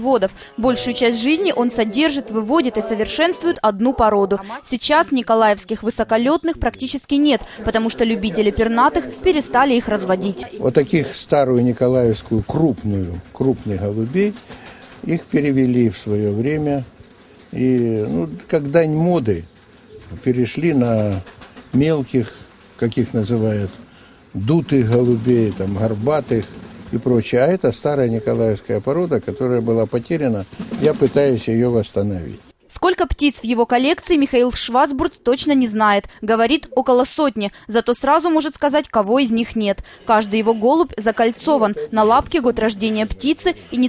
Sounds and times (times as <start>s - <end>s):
Speech: 24.4s - 35.7s.